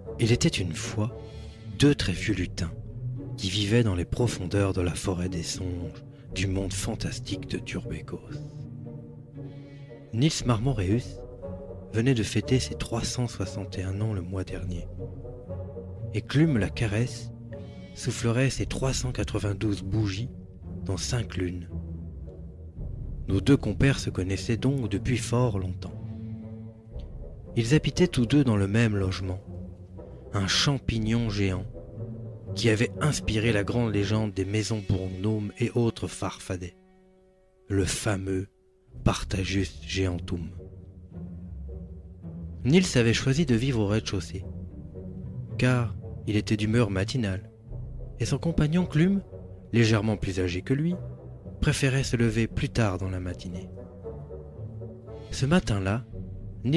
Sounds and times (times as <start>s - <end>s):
Music: 0.0s - 56.7s
Speech: 0.2s - 2.8s, 3.4s - 8.4s, 10.1s - 11.2s, 11.9s - 14.9s, 16.2s - 17.3s, 18.0s - 21.7s, 23.3s - 26.0s, 27.6s - 29.5s, 30.4s - 31.7s, 32.6s - 36.8s, 37.7s - 40.6s, 42.6s - 44.5s, 45.6s - 47.5s, 48.2s - 51.0s, 51.6s - 53.7s, 55.3s - 56.7s.